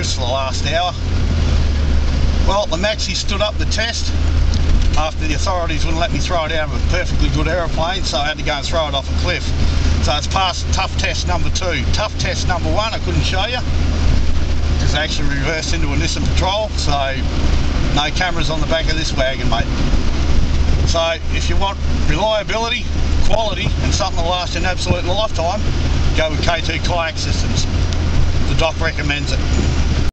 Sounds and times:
Speech: 0:00.0 - 0:01.0, 0:02.4 - 0:04.2, 0:04.9 - 0:13.7, 0:14.8 - 0:17.3, 0:17.9 - 0:19.7, 0:20.8 - 0:27.8, 0:28.4 - 0:29.4
Vehicle: 0:00.0 - 0:30.1.

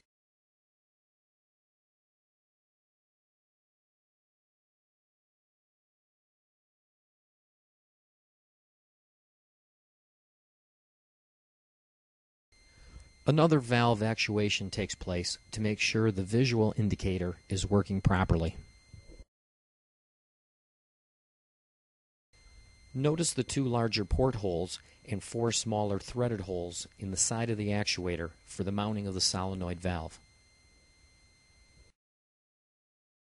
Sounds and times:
Inside, small room: 0:12.6 - 0:19.3, 0:22.4 - 0:32.0
Speech: 0:13.3 - 0:18.6, 0:23.0 - 0:30.2.

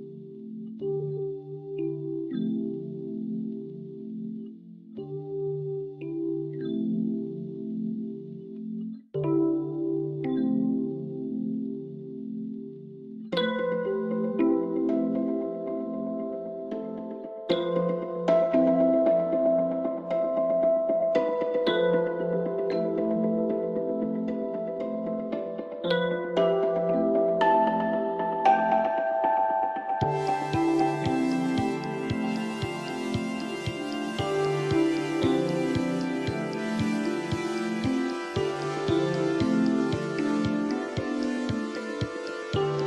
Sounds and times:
Music: 0:00.0 - 0:42.8.

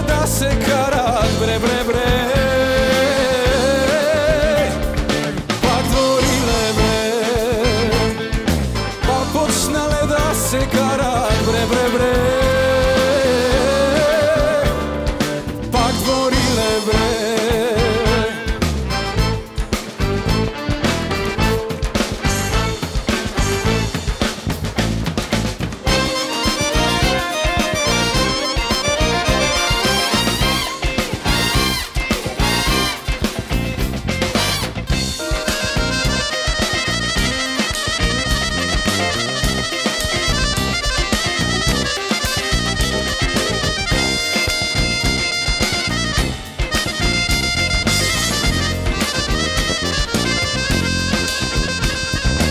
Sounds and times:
Singing: 0:00.0 - 0:04.9, 0:05.6 - 0:08.2, 0:09.1 - 0:14.9, 0:15.7 - 0:18.6
Orchestra: 0:00.0 - 0:52.5
Rock and roll: 0:00.0 - 0:52.5.

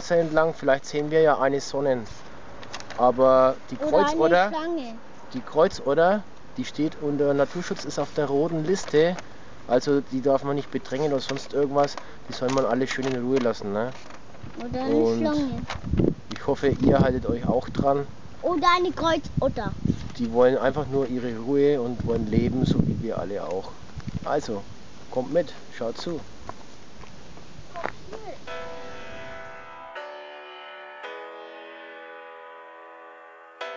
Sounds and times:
Outside, rural or natural: 0:00.0 - 0:30.1
Speech: 0:03.0 - 0:14.0, 0:14.6 - 0:15.6, 0:16.3 - 0:26.3.

